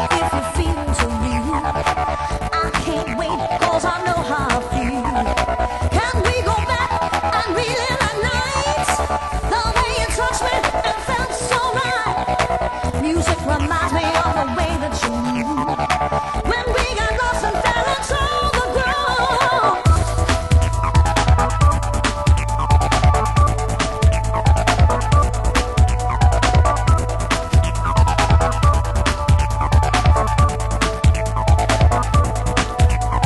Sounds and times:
Techno: 0.0s - 33.2s.

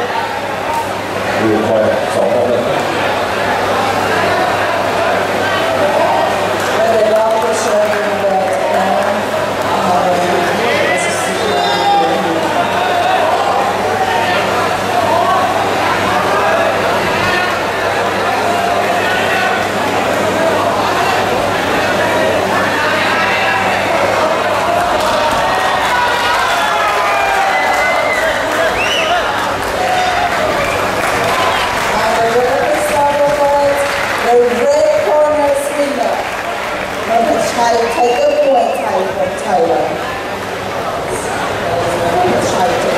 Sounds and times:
Inside, public space: 0.0s - 42.9s
Speech: 3.9s - 24.8s, 31.9s - 36.3s, 37.1s - 40.3s, 40.9s - 42.9s.

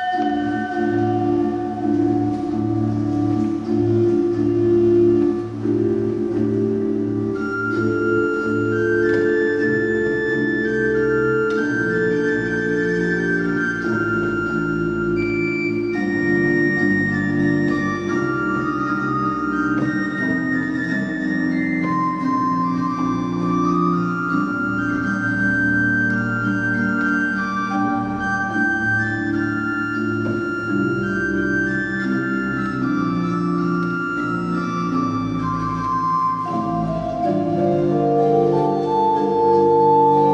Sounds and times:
Classical music: 0.0s - 40.3s
Piano: 0.0s - 40.3s.

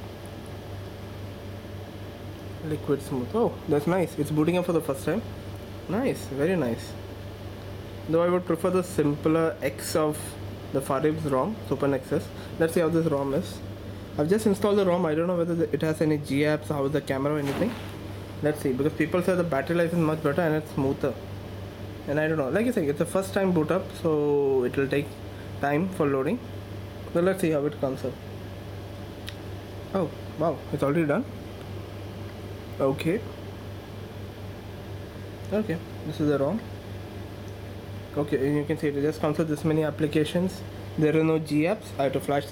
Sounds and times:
Speech: 2.6s - 5.3s, 5.9s - 7.0s, 8.1s - 21.2s, 22.1s - 26.5s, 27.1s - 28.2s, 29.9s - 31.3s, 32.8s - 33.3s, 35.5s - 36.7s, 38.1s - 42.5s.

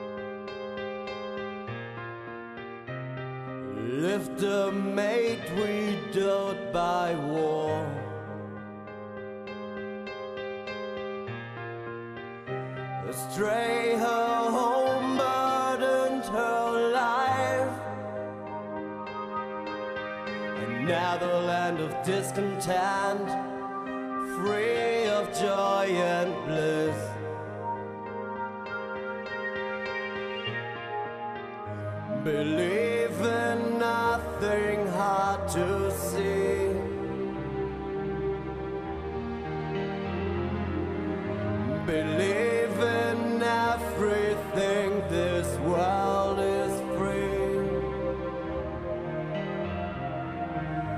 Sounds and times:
Music: 0.0s - 50.9s.

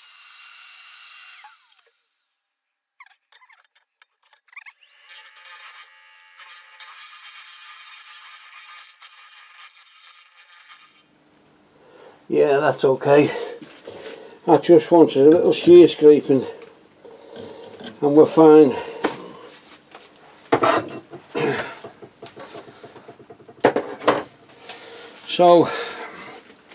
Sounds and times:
Speech: 12.3s - 13.6s, 14.5s - 16.6s, 18.0s - 18.9s, 25.3s - 25.9s.

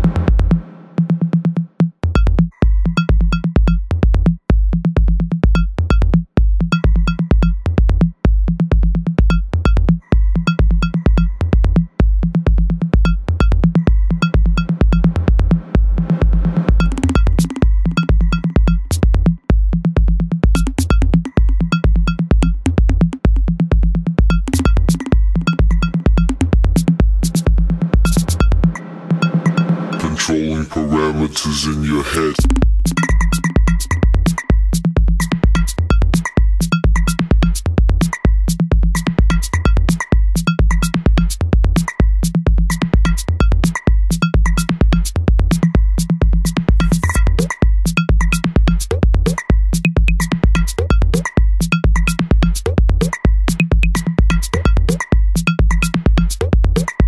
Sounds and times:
Techno: 0.0s - 57.0s.

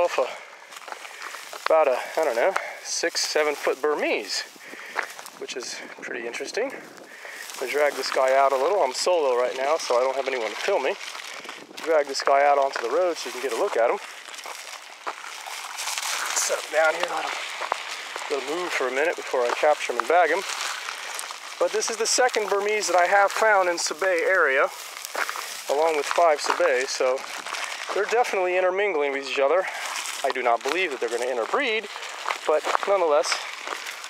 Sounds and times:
Speech: 0.0s - 0.4s, 1.7s - 4.5s, 5.4s - 6.8s, 7.6s - 11.0s, 11.8s - 14.0s, 16.3s - 17.4s, 18.3s - 20.5s, 21.6s - 24.8s, 25.7s - 27.3s, 27.9s - 33.5s
Outside, rural or natural: 0.0s - 34.0s.

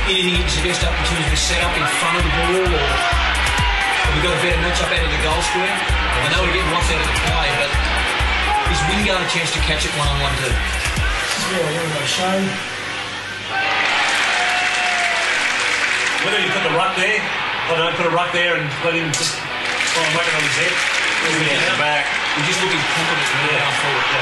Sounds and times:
Music: 0.0s - 24.2s
Speech: 0.1s - 3.0s, 4.1s - 7.8s, 8.7s - 10.6s, 20.0s - 24.2s.

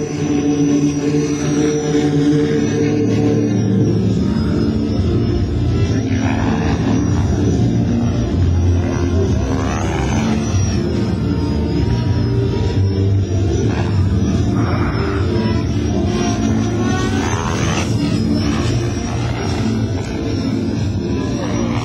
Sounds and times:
Aircraft: 0.0s - 21.8s.

